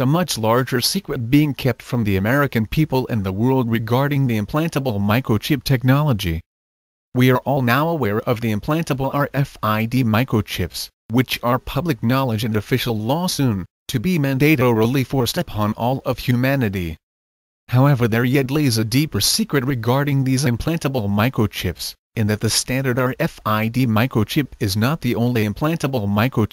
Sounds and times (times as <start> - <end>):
Speech: 0.0 - 6.5, 7.2 - 17.0, 17.7 - 26.5.